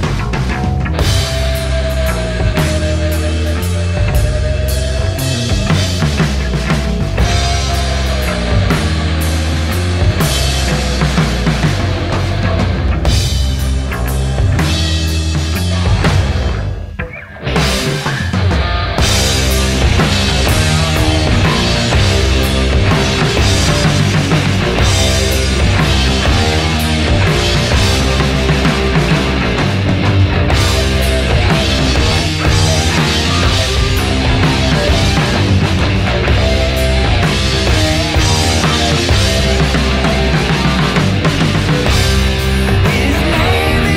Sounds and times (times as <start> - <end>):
Music: 0.0 - 43.9.